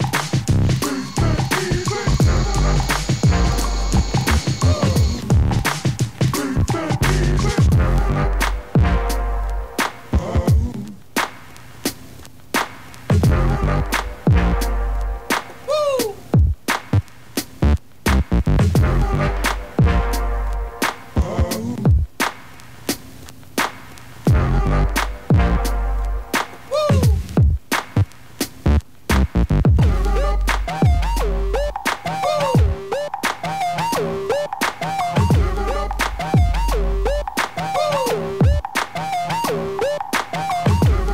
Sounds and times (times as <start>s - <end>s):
Music: 0.0s - 41.1s.